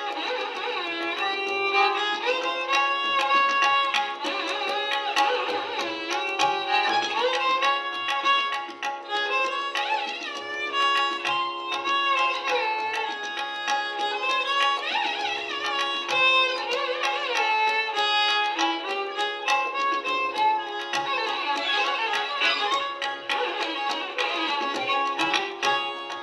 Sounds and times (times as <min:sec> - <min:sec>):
Violin, fiddle: 0:00.0 - 0:26.2.